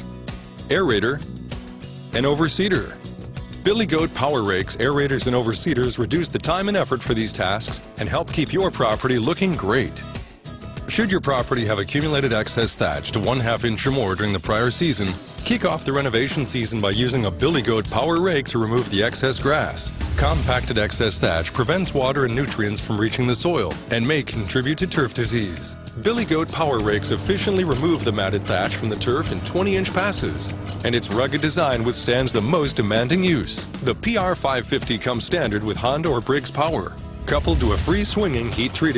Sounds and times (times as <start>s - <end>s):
Music: 0.0s - 38.9s
Speech: 0.7s - 1.3s, 2.1s - 10.2s, 10.9s - 38.9s.